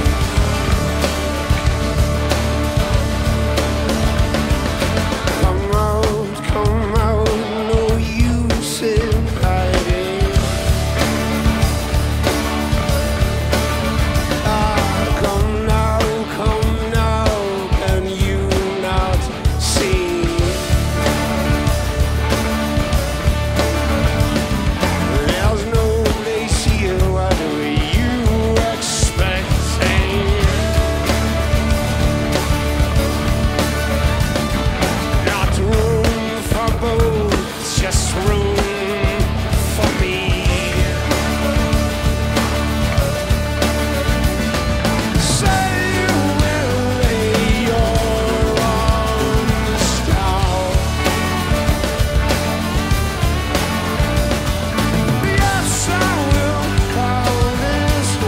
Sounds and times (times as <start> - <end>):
Music: 0.0 - 58.2.